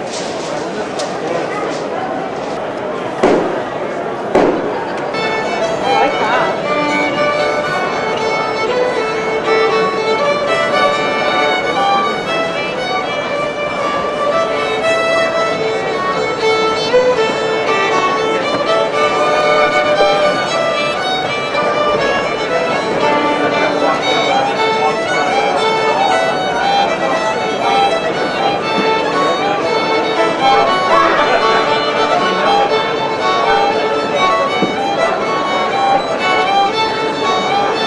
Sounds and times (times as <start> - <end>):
Violin, fiddle: 0.0 - 37.8.